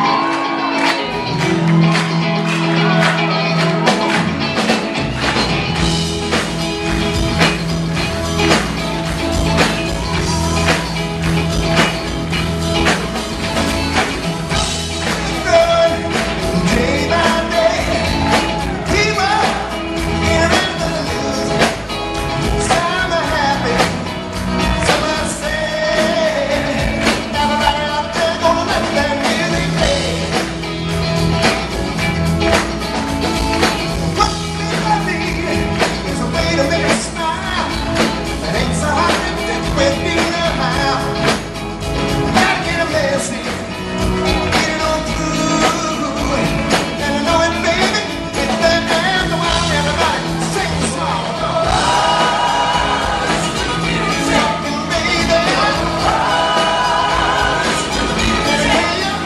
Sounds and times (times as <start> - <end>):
Music: 0.0 - 59.2.